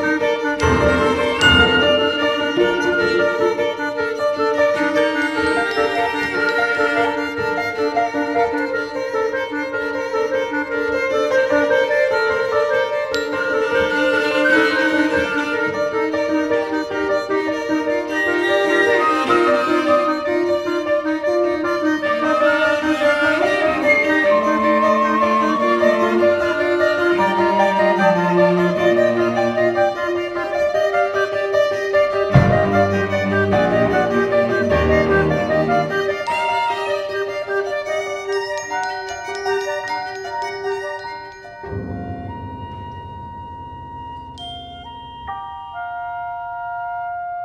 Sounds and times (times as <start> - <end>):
Orchestra: 0.0 - 47.4.